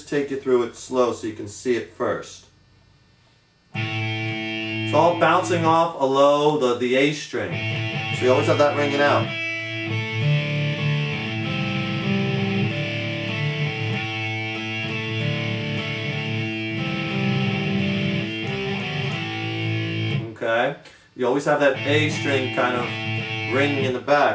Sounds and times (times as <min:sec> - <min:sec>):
Speech: 0:00.0 - 0:02.5, 0:04.9 - 0:07.6, 0:08.2 - 0:09.3, 0:20.2 - 0:24.3
Electric guitar: 0:03.8 - 0:05.9, 0:07.4 - 0:20.4, 0:21.6 - 0:24.3.